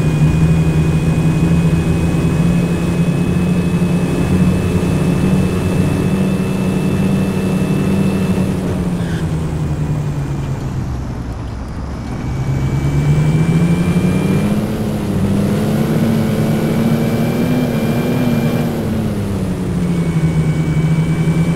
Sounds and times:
Vehicle: 0.0 - 21.5.

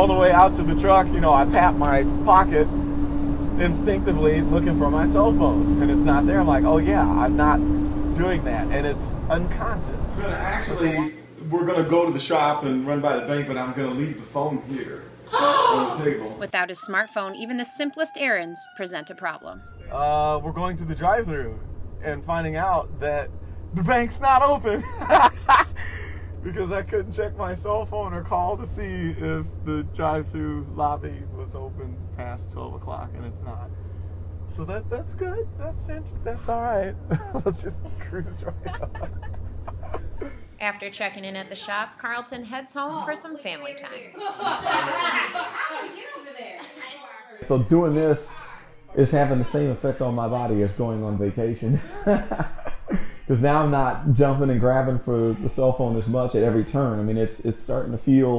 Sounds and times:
Speech: 0.0 - 2.7, 3.6 - 7.6, 8.2 - 25.7, 26.5 - 33.7, 34.6 - 44.1, 44.7 - 52.3, 53.3 - 58.3
Laughter: 24.6 - 26.8, 37.0 - 40.4, 44.1 - 47.2, 51.5 - 53.8.

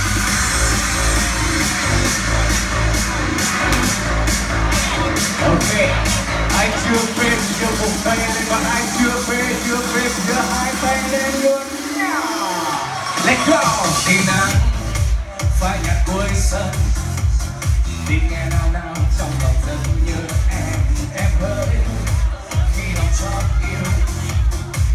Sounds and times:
Dance music: 0.0 - 24.9
Pop music: 0.0 - 24.9.

